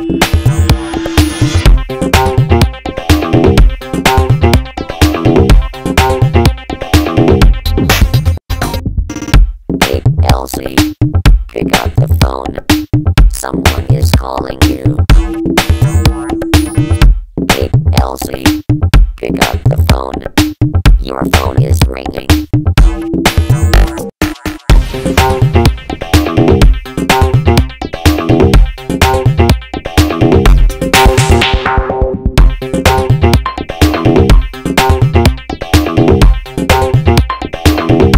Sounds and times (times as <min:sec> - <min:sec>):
Dance music: 0:00.0 - 0:08.4, 0:09.8 - 0:18.6, 0:19.2 - 0:38.1
Disco: 0:11.5 - 0:18.6.